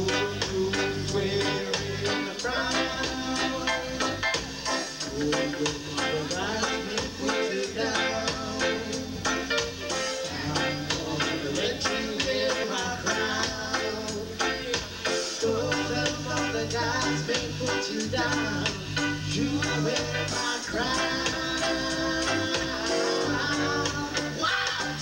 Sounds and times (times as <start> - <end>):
Music: 0.0 - 25.0
Singing: 0.0 - 25.0.